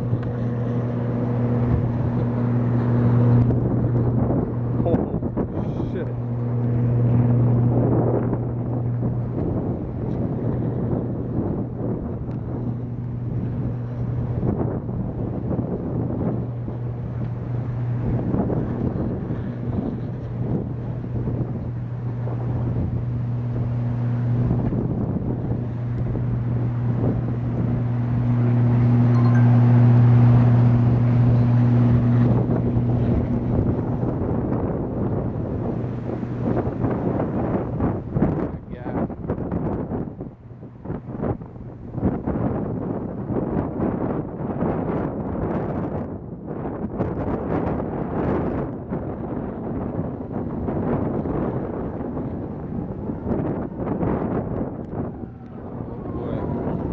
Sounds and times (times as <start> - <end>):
Vehicle: 0.0 - 56.9.